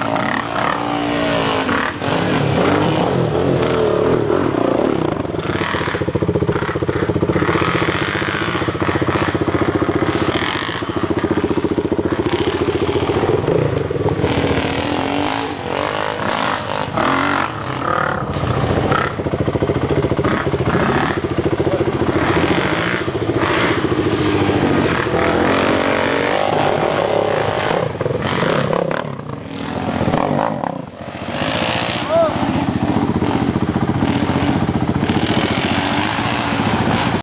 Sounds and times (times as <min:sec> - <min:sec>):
Motorcycle: 0:00.0 - 0:37.2.